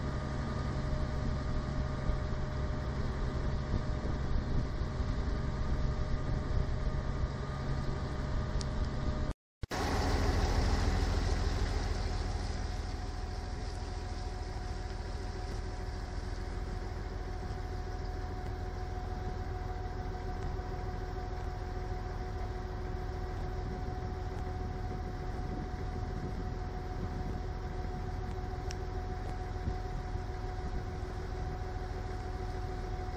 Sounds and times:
Boat, Water vehicle: 0.0 - 33.1.

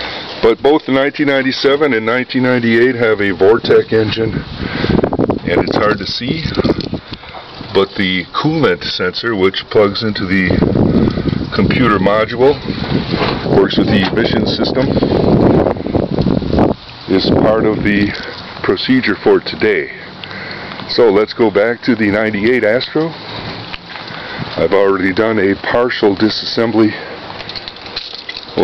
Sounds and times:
Speech: 0.4 - 4.4, 5.5 - 6.8, 7.7 - 10.6, 11.5 - 12.6, 13.6 - 15.0, 17.1 - 20.1, 20.9 - 23.2, 24.6 - 27.1.

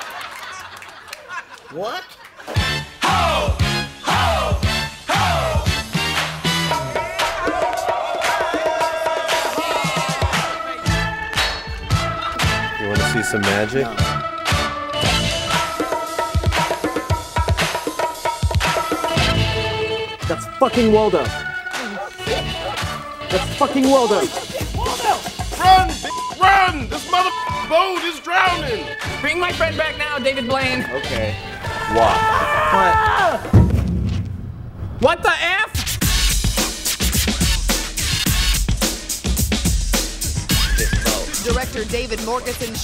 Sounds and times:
Music: 2.5 - 33.7, 35.3 - 42.8.

